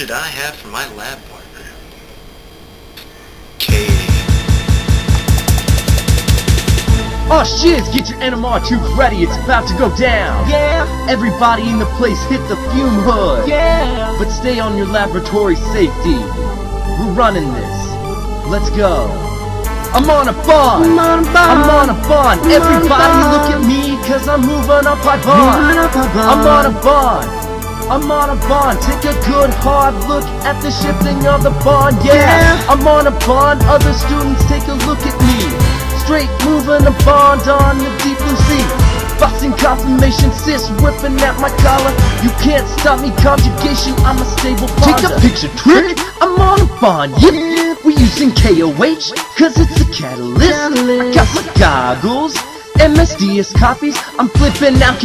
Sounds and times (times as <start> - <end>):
Music: 3.6 - 55.0.